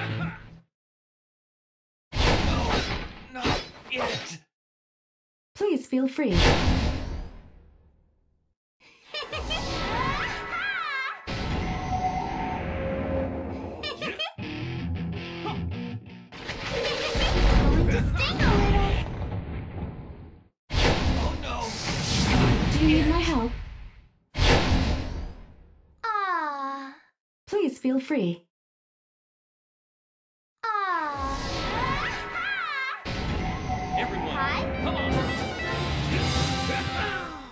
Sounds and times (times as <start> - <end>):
Music: 14.4 - 16.4, 33.8 - 37.3.